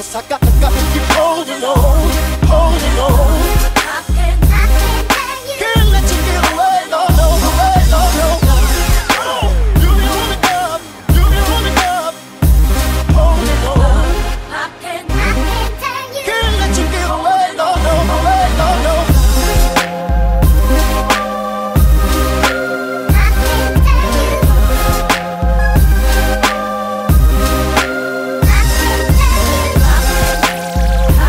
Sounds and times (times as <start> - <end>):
Music: 0.0 - 31.2.